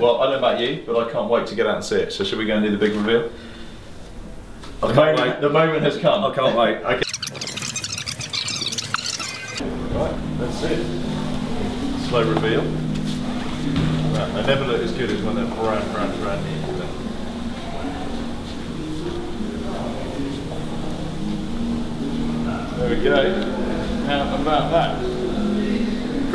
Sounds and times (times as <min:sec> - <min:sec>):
Inside, large room or hall: 0:00.0 - 0:26.3
Music: 0:09.6 - 0:26.3.